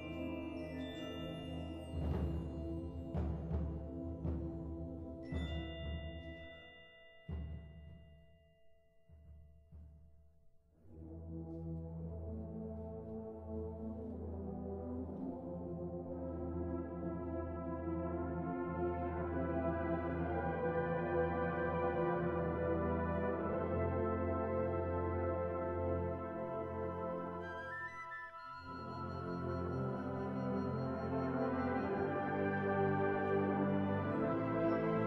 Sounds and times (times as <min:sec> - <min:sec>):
Orchestra: 0:00.0 - 0:08.2, 0:10.8 - 0:35.0.